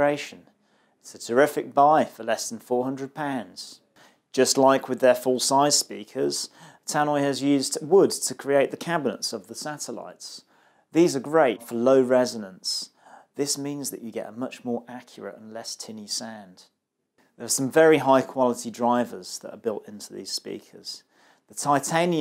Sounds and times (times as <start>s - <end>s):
Speech: 0.0s - 16.8s, 17.4s - 22.2s.